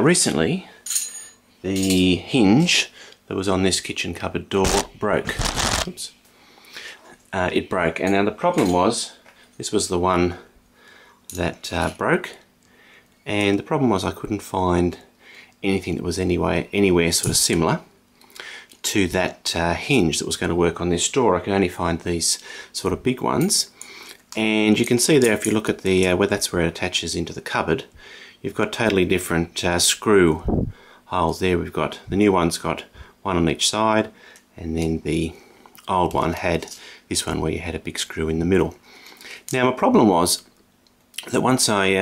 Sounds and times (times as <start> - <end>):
Speech: 0.0 - 0.8, 1.6 - 6.2, 7.3 - 10.5, 11.3 - 12.5, 13.2 - 17.9, 18.8 - 23.8, 24.4 - 38.8, 39.5 - 40.5, 41.2 - 42.0.